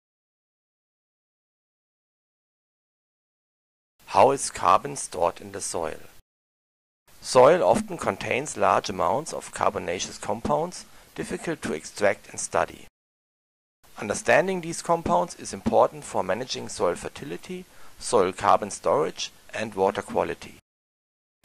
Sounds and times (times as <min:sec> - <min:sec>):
Speech: 0:04.1 - 0:06.2, 0:07.2 - 0:12.9, 0:14.0 - 0:20.6.